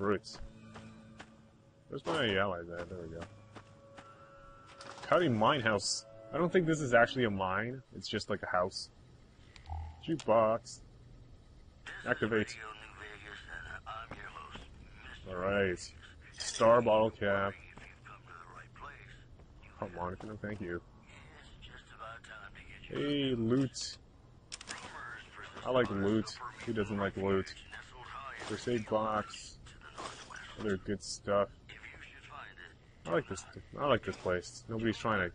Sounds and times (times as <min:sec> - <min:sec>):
Speech: 0:00.0 - 0:00.4, 0:01.9 - 0:03.3, 0:05.1 - 0:08.9, 0:10.0 - 0:10.8, 0:11.9 - 0:24.0, 0:24.7 - 0:35.3.